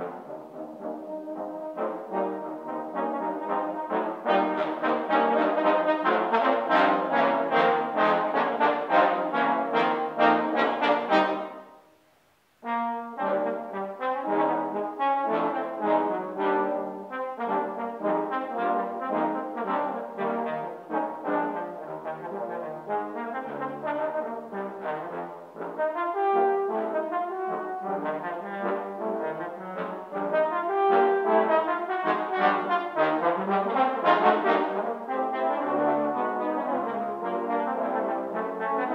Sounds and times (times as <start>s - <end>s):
Trombone: 0.0s - 12.0s, 12.6s - 38.9s
Wind instrument, woodwind instrument: 0.0s - 12.0s, 12.6s - 38.9s.